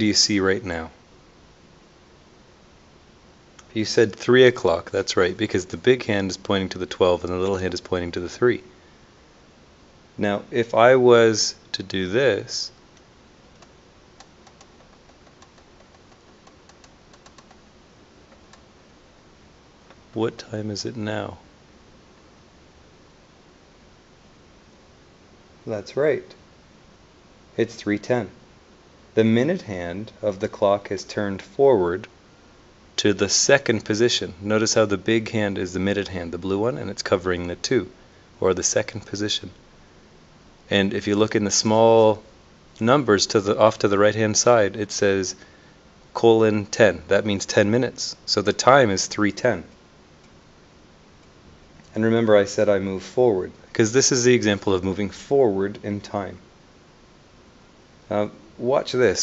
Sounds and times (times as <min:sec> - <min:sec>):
Speech: 0:00.0 - 0:01.0, 0:03.6 - 0:08.7, 0:10.2 - 0:12.8, 0:20.1 - 0:21.5, 0:25.6 - 0:26.4, 0:27.6 - 0:28.4, 0:29.2 - 0:32.1, 0:33.0 - 0:39.6, 0:40.7 - 0:45.4, 0:46.1 - 0:49.7, 0:51.9 - 0:56.4, 0:58.1 - 0:59.2.